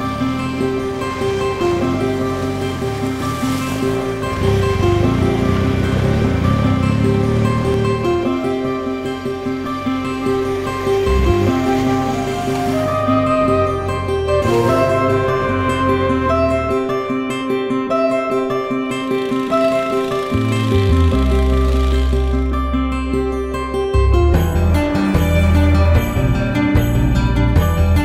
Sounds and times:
Music: 0.0 - 28.0.

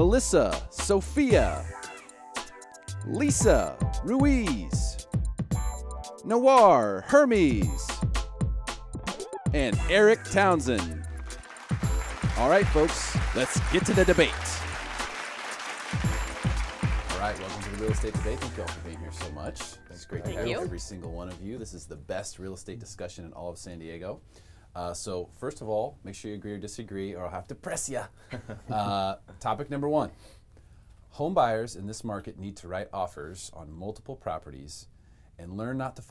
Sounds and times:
Speech: 3.1 - 4.9, 6.3 - 8.0, 12.4 - 14.6, 17.1 - 24.2, 24.8 - 28.1, 31.1 - 36.1.

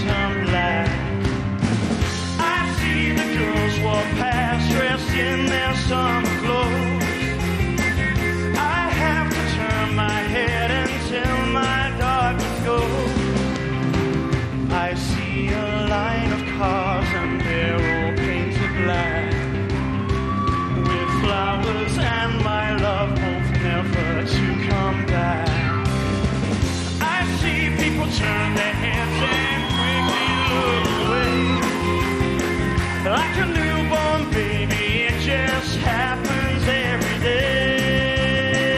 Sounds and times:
Rock and roll: 0.0 - 38.7
Singing: 20.5 - 25.6, 27.0 - 32.2.

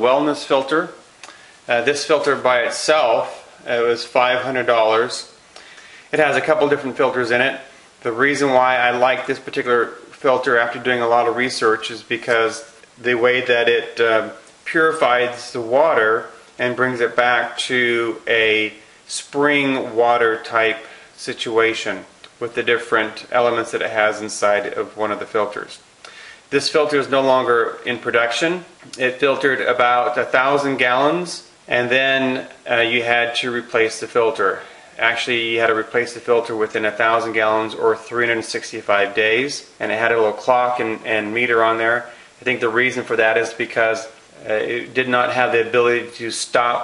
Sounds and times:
Speech: 0.0 - 1.0, 1.7 - 5.4, 6.1 - 25.8, 26.5 - 46.8.

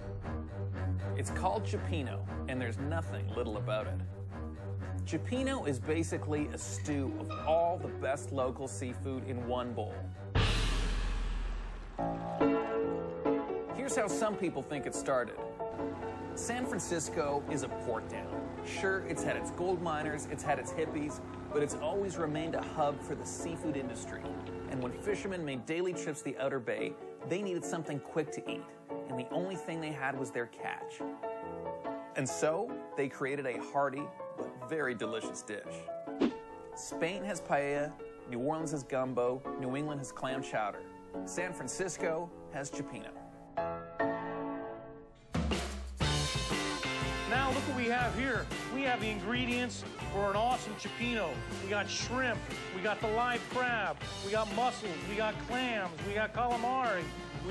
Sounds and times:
Music: 0.0 - 57.5
Speech: 1.2 - 4.0, 5.0 - 10.0, 13.8 - 15.4, 16.4 - 31.0, 32.2 - 35.9, 36.8 - 43.2, 47.3 - 57.5.

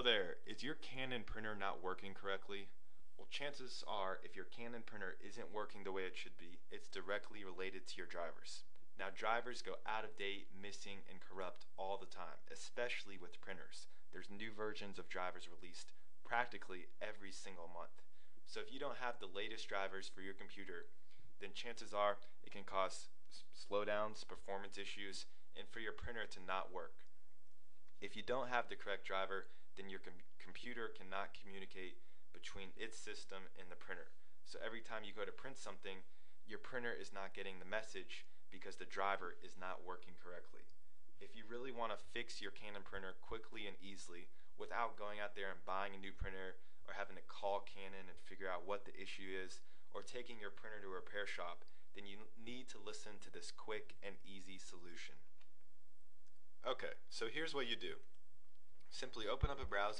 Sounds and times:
Speech: 0.0 - 27.0, 28.0 - 55.3, 56.6 - 58.0, 58.9 - 59.9.

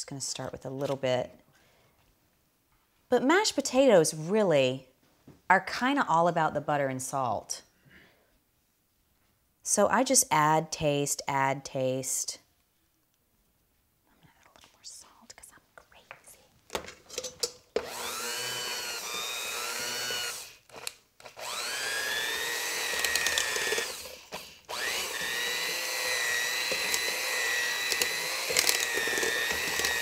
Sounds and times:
Inside, small room: 0.0 - 30.0.

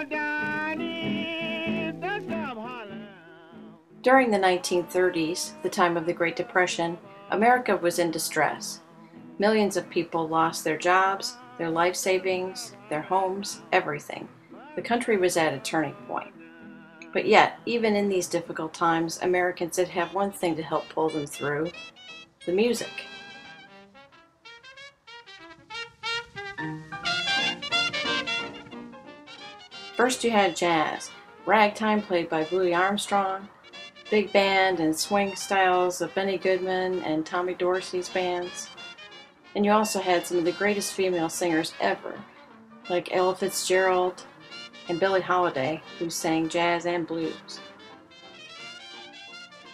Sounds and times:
Music: 0.0 - 49.7
Speech: 4.1 - 8.8, 9.4 - 16.3, 17.0 - 21.7, 22.5 - 23.0, 30.0 - 33.5, 34.2 - 38.7, 39.6 - 42.2, 42.9 - 44.2, 44.9 - 47.6.

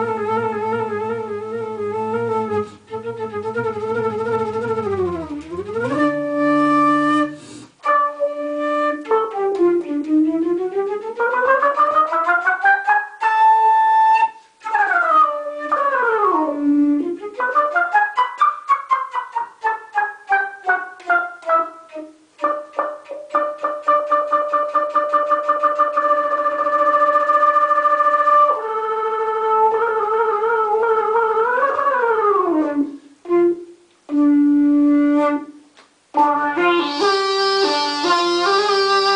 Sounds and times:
Flute: 0.0 - 39.1.

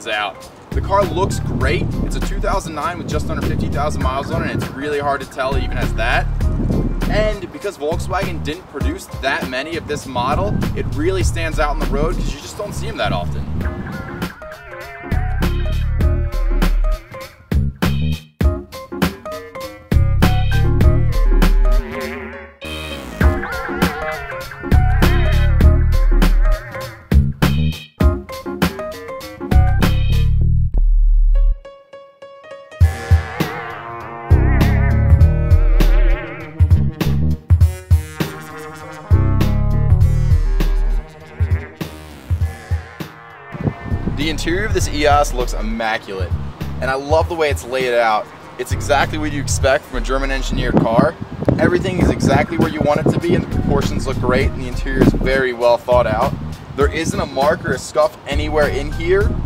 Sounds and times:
Speech: 0.0 - 6.3, 7.1 - 13.5, 44.2 - 59.4
Music: 0.0 - 59.4.

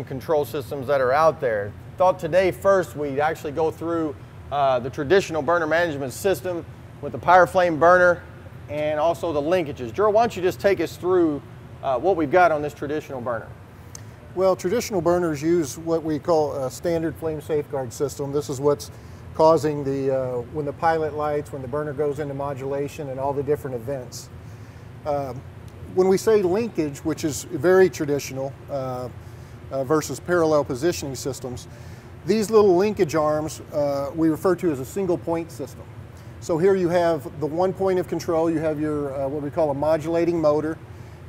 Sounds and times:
Speech: 0.0 - 13.6, 14.4 - 24.3, 25.1 - 40.8.

